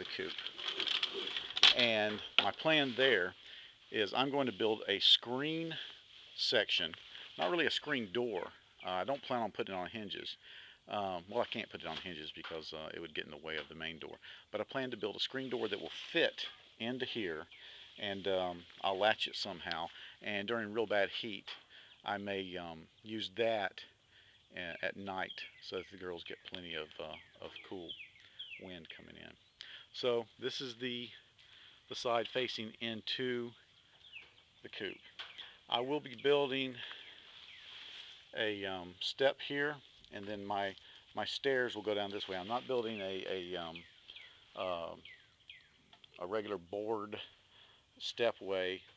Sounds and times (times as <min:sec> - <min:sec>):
Speech: 0:00.0 - 0:00.5, 0:01.6 - 0:28.0, 0:28.6 - 0:31.3, 0:31.9 - 0:33.6, 0:34.6 - 0:35.0, 0:35.7 - 0:37.0, 0:38.3 - 0:43.9, 0:44.6 - 0:45.0, 0:46.2 - 0:47.4, 0:48.0 - 0:48.9
Outside, rural or natural: 0:00.0 - 0:48.9.